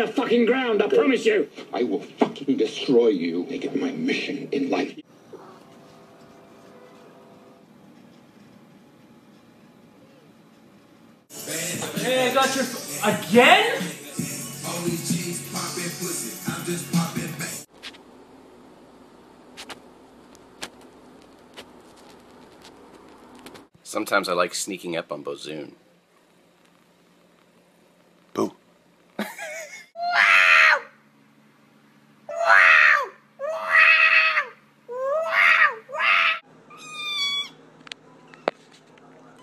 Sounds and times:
Speech: 0.0s - 5.0s, 23.8s - 25.8s.

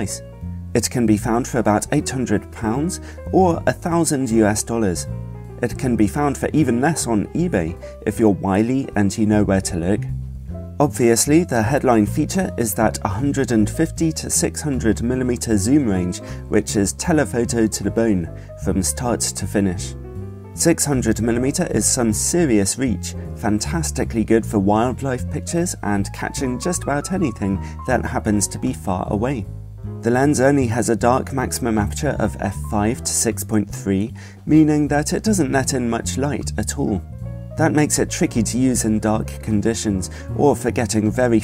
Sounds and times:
Speech: 0.0s - 10.1s, 10.8s - 20.0s, 20.6s - 41.4s
Music: 0.0s - 41.4s.

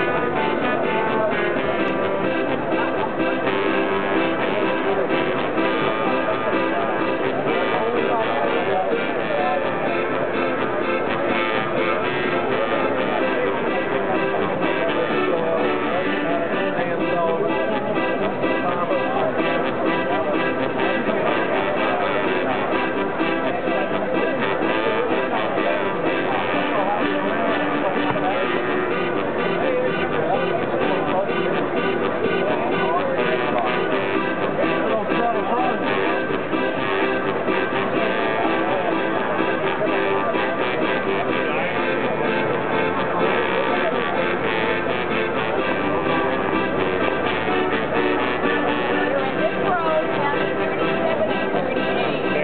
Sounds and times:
Music: 0.0s - 52.4s
Speech: 0.0s - 52.4s.

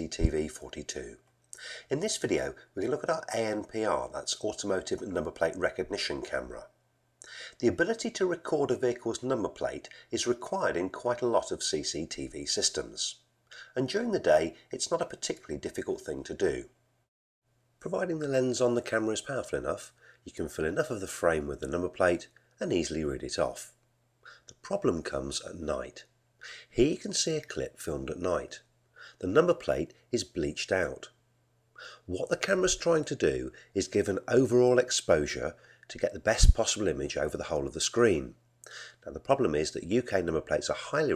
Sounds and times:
Speech: 0.0s - 6.8s, 7.5s - 16.8s, 17.8s - 23.8s, 24.4s - 31.2s, 31.8s - 38.4s, 39.0s - 41.1s.

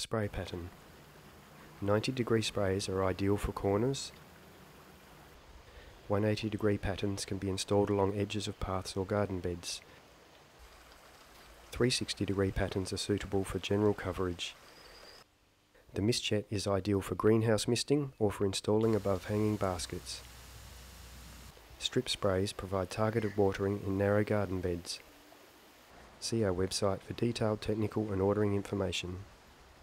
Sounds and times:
Speech: 0.0s - 0.7s, 1.8s - 4.2s, 6.1s - 9.8s, 11.7s - 14.6s, 15.9s - 20.2s, 21.8s - 25.0s, 26.2s - 29.3s.

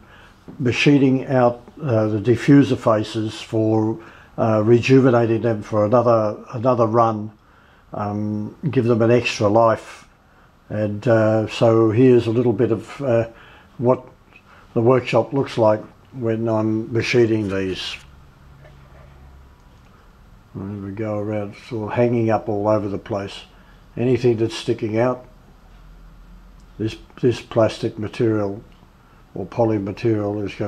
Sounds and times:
Speech: 0.6s - 10.1s, 10.7s - 14.2s, 14.8s - 18.1s, 20.6s - 25.4s, 26.8s - 28.8s, 29.4s - 30.6s.

